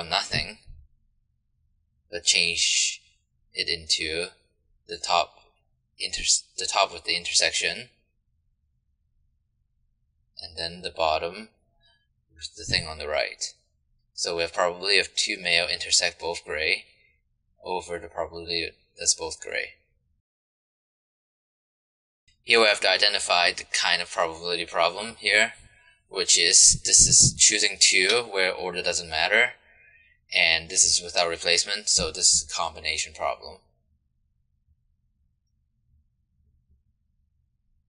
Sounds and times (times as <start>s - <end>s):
Speech: 0.0s - 0.7s, 2.2s - 3.0s, 3.6s - 5.4s, 6.0s - 7.9s, 10.4s - 11.5s, 12.4s - 13.6s, 14.2s - 16.9s, 17.6s - 19.8s, 22.5s - 29.6s, 30.3s - 33.6s.